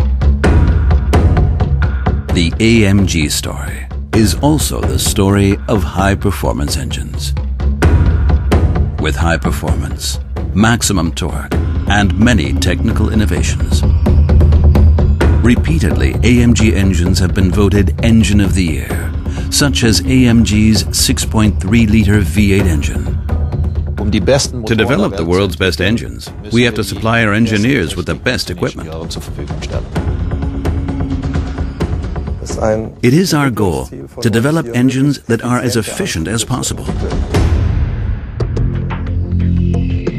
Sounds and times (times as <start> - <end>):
Music: 0.0 - 40.1
Speech: 2.3 - 7.4, 9.0 - 13.8, 15.4 - 23.2, 24.0 - 29.9, 32.4 - 37.3.